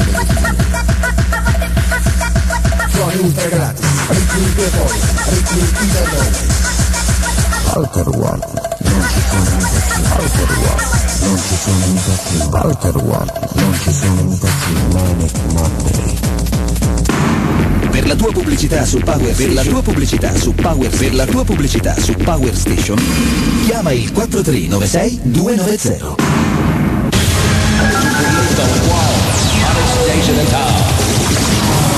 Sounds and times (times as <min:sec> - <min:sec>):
Music: 0:00.0 - 0:31.9.